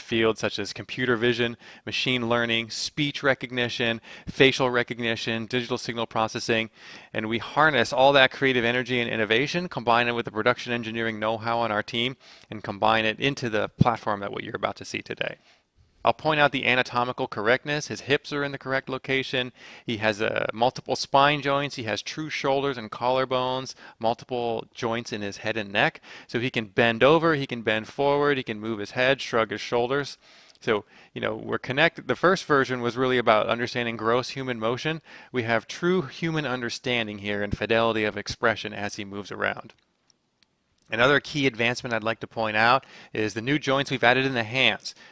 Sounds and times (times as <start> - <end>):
Speech: 0.0 - 15.4, 16.1 - 39.8, 40.9 - 45.0.